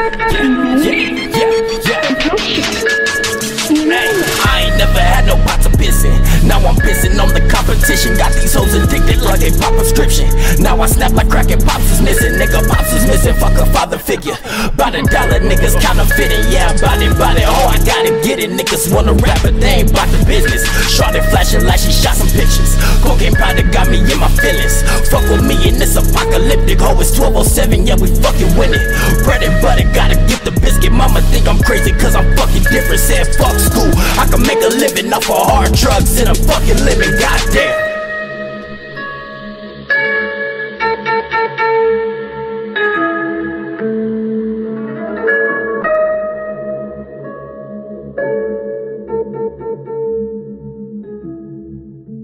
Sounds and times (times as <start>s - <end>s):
Music: 0.0s - 52.2s.